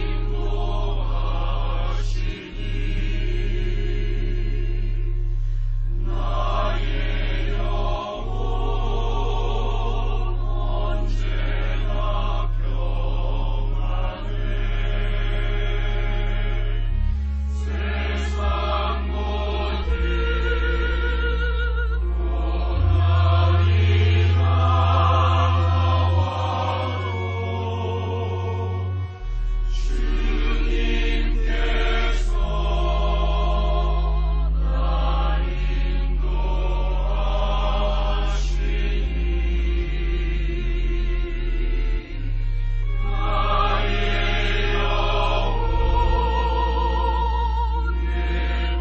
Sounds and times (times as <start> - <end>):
Choir: 0.0 - 48.8.